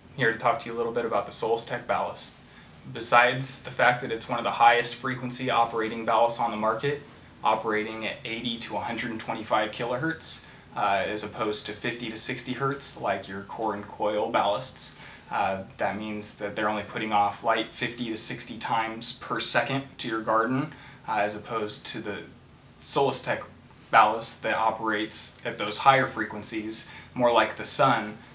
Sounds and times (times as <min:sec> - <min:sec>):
Speech: 0:00.1 - 0:28.3.